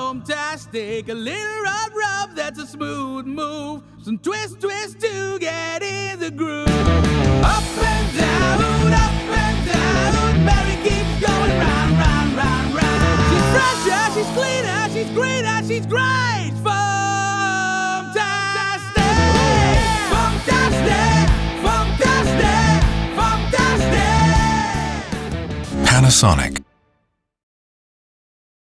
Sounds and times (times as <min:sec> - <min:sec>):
Music: 0:00.0 - 0:27.3
Speech: 0:25.8 - 0:26.6.